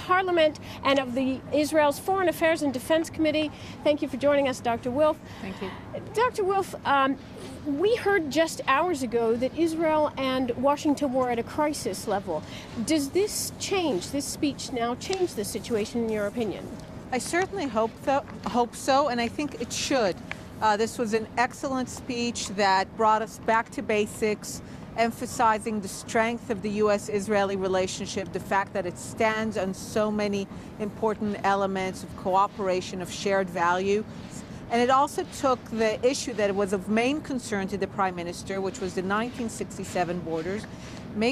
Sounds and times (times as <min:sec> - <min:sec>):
Female speech, woman speaking: 0:00.0 - 0:34.1, 0:34.7 - 0:41.3
Conversation: 0:00.0 - 0:41.3.